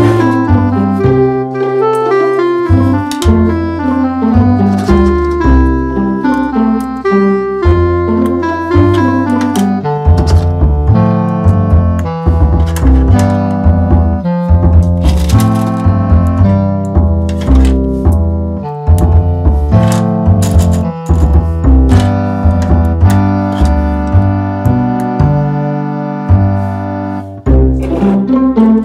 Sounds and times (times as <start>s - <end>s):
Electronic tuner: 0.0s - 28.8s
Music: 0.0s - 28.8s.